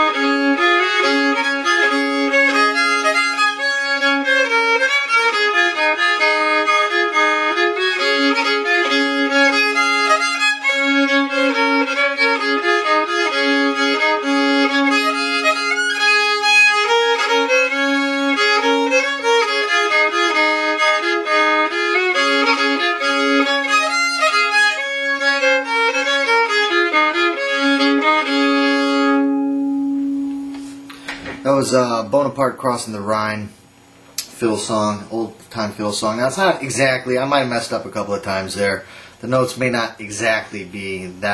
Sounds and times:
Violin, fiddle: 0.0s - 29.7s.

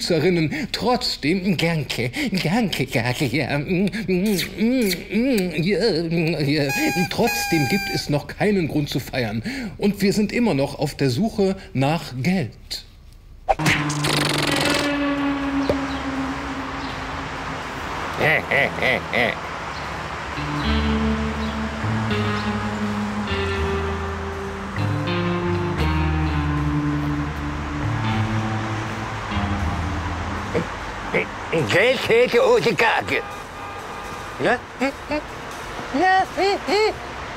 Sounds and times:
Speech: 0.0s - 12.9s, 31.2s - 33.3s, 34.4s - 34.6s
Music: 6.7s - 7.9s, 13.5s - 14.9s, 20.2s - 31.1s.

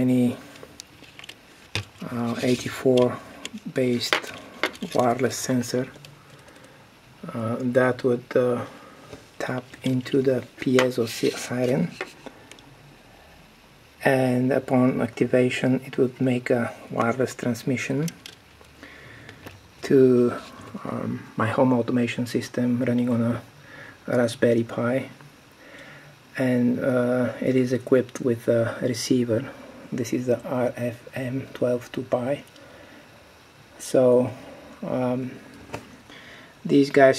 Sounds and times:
Speech: 0.0s - 0.5s, 2.0s - 6.0s, 7.2s - 8.8s, 9.4s - 12.1s, 14.0s - 18.2s, 19.8s - 23.5s, 24.1s - 25.2s, 26.3s - 32.5s, 33.8s - 35.4s, 36.6s - 37.1s.

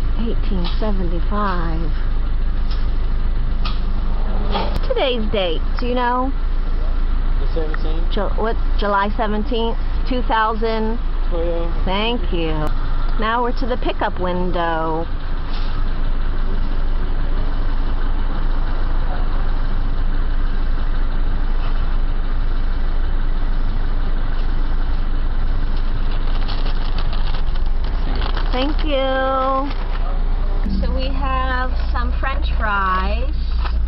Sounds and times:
Outside, urban or manmade: 0.0s - 33.8s.

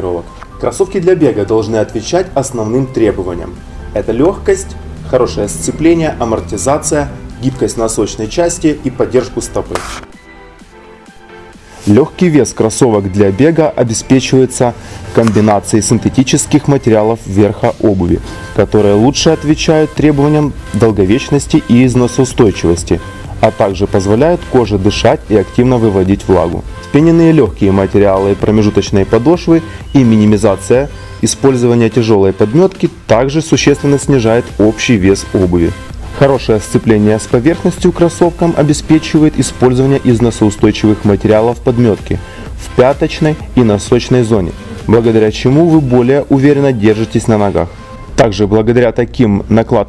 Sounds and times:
Speech: 0.0s - 9.8s, 11.9s - 49.8s
Music: 0.0s - 49.8s.

